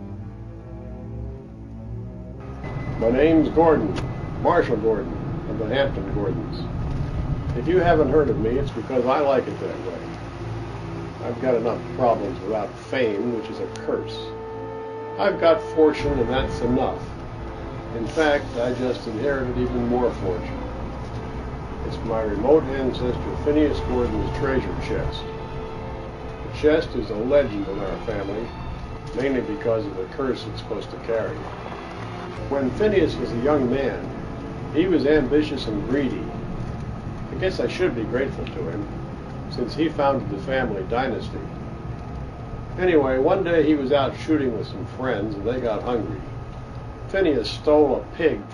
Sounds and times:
Music: 0.0 - 48.5
Speech: 3.0 - 6.7, 7.6 - 10.1, 11.2 - 14.3, 15.2 - 17.1, 17.9 - 20.6, 21.8 - 25.3, 26.6 - 28.5, 29.2 - 31.4, 32.5 - 34.1, 34.8 - 36.3, 37.3 - 38.9, 39.5 - 41.5, 42.8 - 46.3, 47.1 - 48.5.

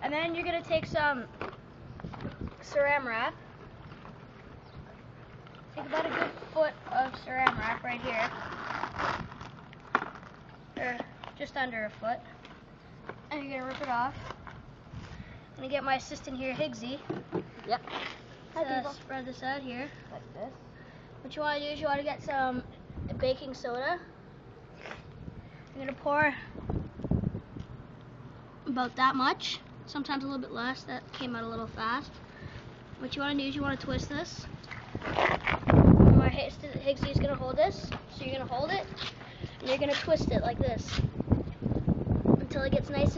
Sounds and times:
Speech: 5.8 - 8.4, 28.7 - 32.1, 36.2 - 39.0, 39.6 - 41.0, 42.4 - 43.1.

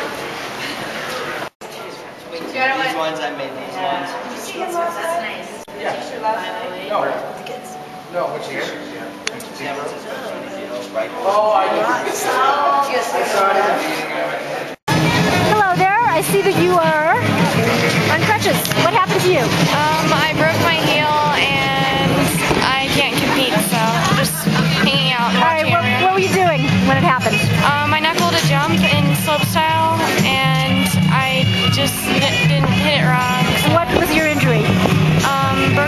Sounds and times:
Inside, public space: 0.0 - 35.8
Music: 5.7 - 12.4, 14.9 - 35.8
Speech: 18.1 - 35.8.

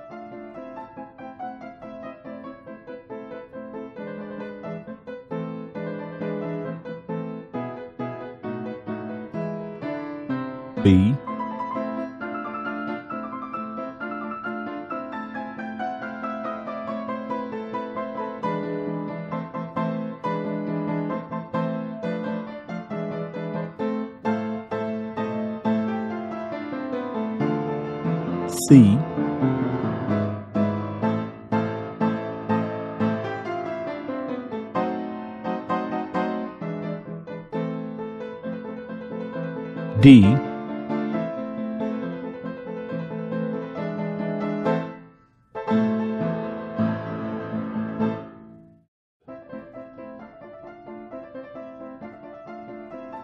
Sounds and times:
Music: 0.0 - 28.4, 29.0 - 39.2, 42.2 - 53.2
Speech: 10.9 - 11.2, 28.5 - 29.1, 40.0 - 40.4.

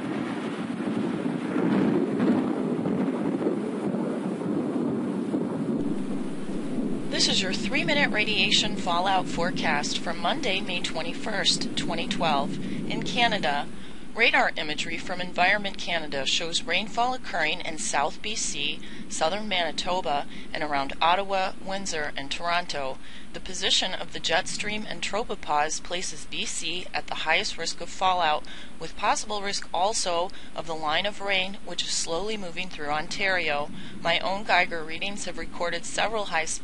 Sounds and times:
Speech: 7.2 - 36.6.

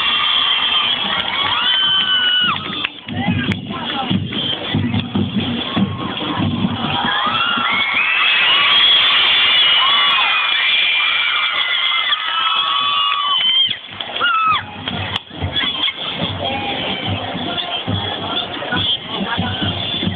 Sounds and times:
Music: 0.0 - 11.0, 12.4 - 20.1
Speech: 3.0 - 5.2, 15.3 - 20.1.

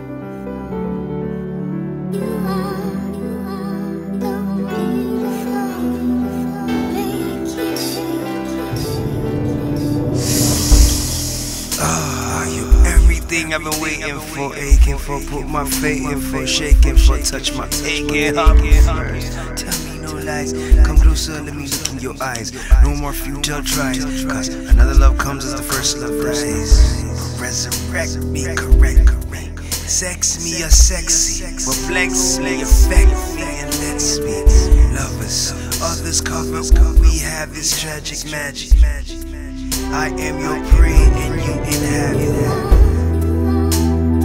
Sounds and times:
Music: 0.0 - 44.2.

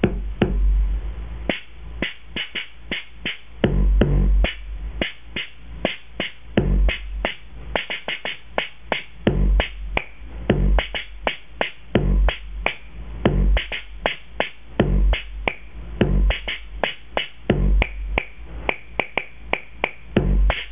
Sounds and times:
Effects unit: 0.0 - 20.7
Inside, small room: 0.0 - 20.7.

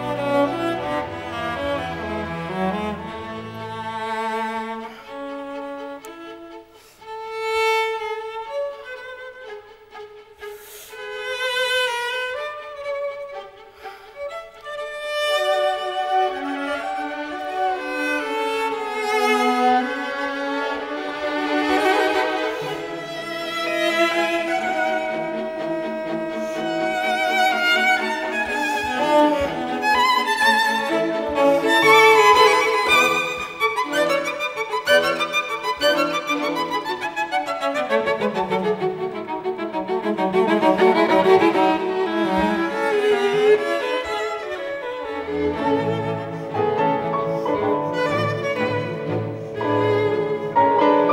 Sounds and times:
Violin, fiddle: 0.0 - 51.1.

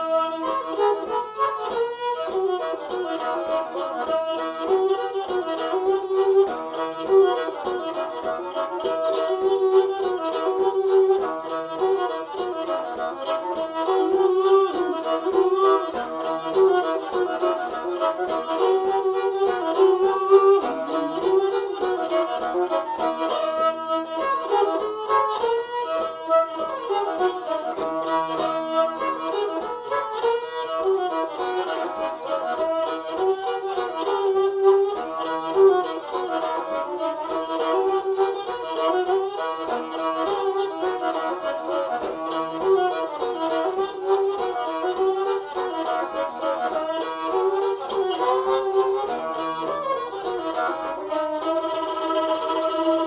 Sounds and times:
Violin, fiddle: 0.0 - 53.0.

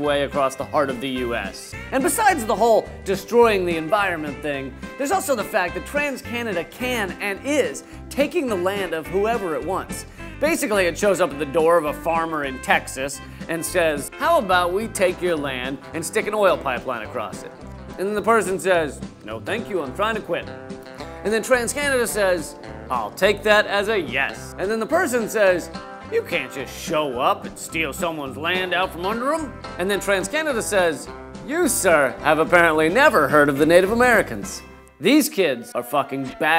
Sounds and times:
Speech: 0.0 - 20.4, 21.2 - 36.5
Music: 0.0 - 36.5.

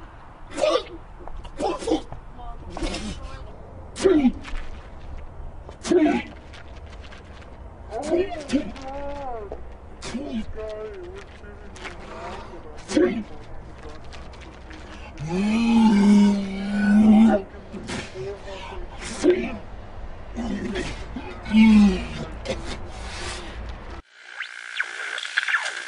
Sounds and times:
Speech: 7.9 - 14.3.

